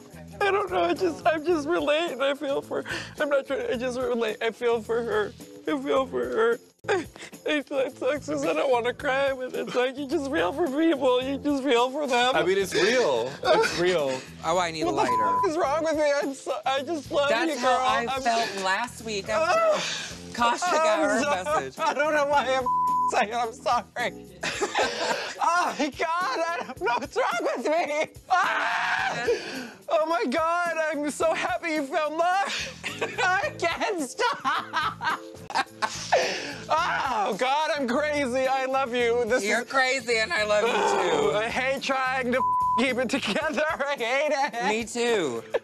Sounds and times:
Music: 0:00.0 - 0:45.6.

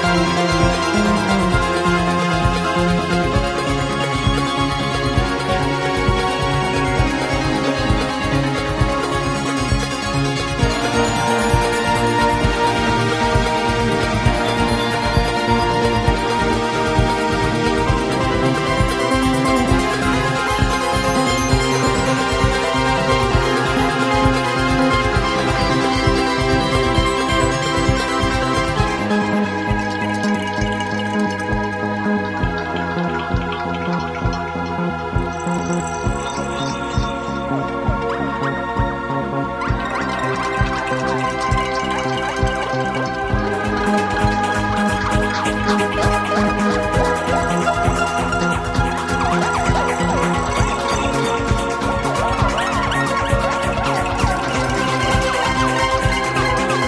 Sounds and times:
Video game music: 0:00.0 - 0:56.8.

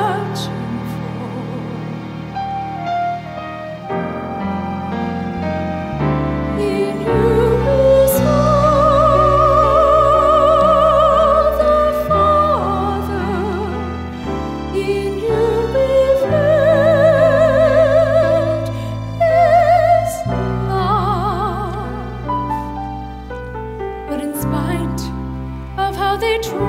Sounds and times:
Christmas music: 0:00.0 - 0:26.6
Classical music: 0:00.0 - 0:26.6
Singing: 0:06.6 - 0:22.0.

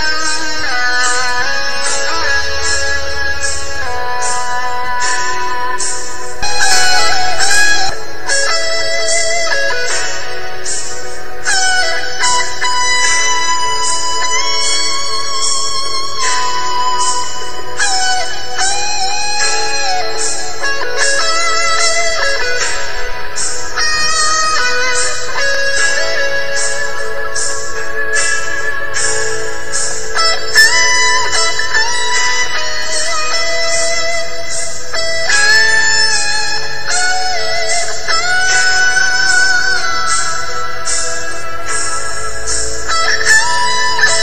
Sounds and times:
Tambourine: 0:00.0 - 0:44.2.

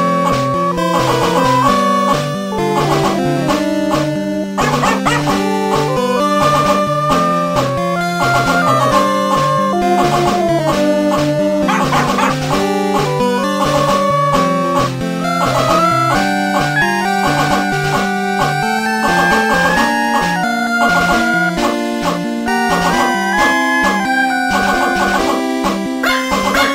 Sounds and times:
Music: 0:00.0 - 0:26.7.

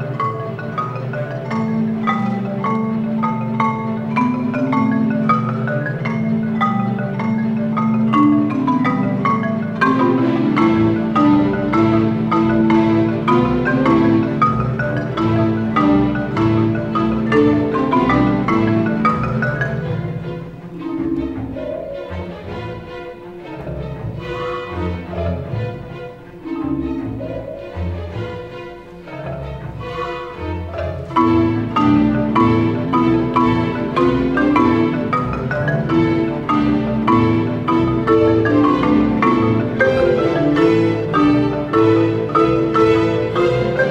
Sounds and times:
Glockenspiel: 0:00.0 - 0:24.1, 0:30.5 - 0:43.9.

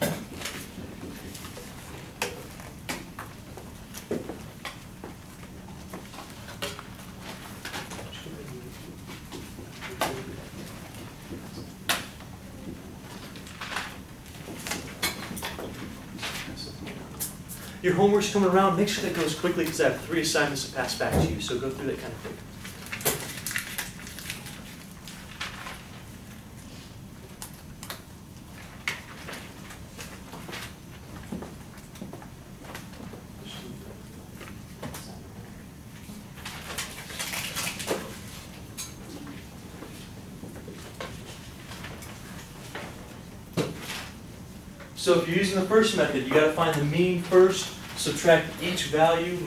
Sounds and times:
Inside, large room or hall: 0:00.0 - 0:49.4.

